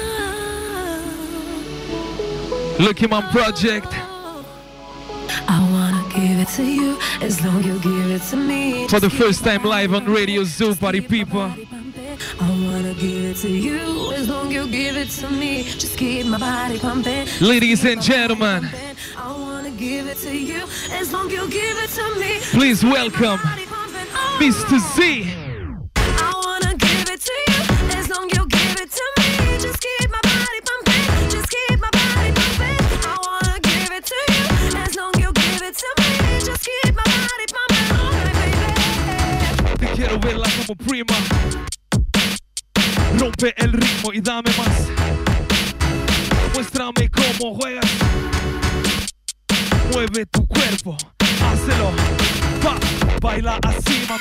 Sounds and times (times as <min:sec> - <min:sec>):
Music: 0:00.0 - 0:54.2
Speech: 0:02.8 - 0:04.1, 0:08.9 - 0:11.6, 0:17.4 - 0:18.8, 0:22.5 - 0:23.6, 0:24.4 - 0:25.4, 0:39.9 - 0:41.3, 0:43.1 - 0:44.8, 0:46.6 - 0:47.8, 0:49.9 - 0:51.9.